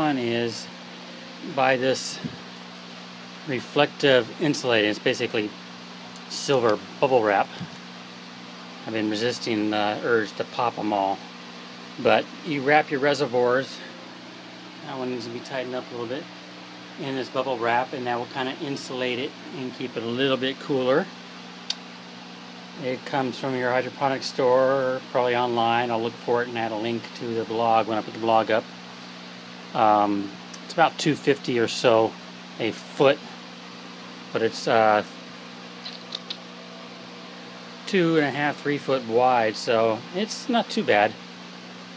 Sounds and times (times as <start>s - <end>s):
Speech: 0.0s - 0.7s, 1.4s - 2.4s, 3.5s - 5.6s, 6.2s - 7.7s, 8.8s - 11.2s, 12.0s - 13.9s, 14.8s - 16.3s, 17.0s - 21.2s, 22.8s - 28.7s, 29.8s - 33.3s, 34.3s - 35.2s, 37.9s - 41.2s.